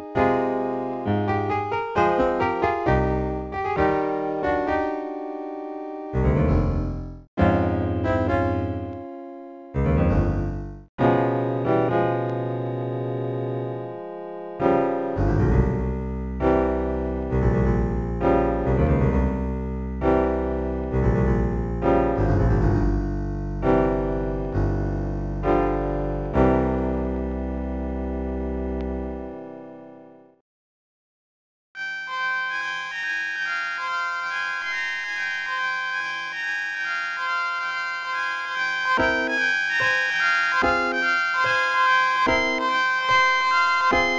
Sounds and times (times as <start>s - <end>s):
Piano: 0.0s - 30.4s, 31.8s - 44.1s.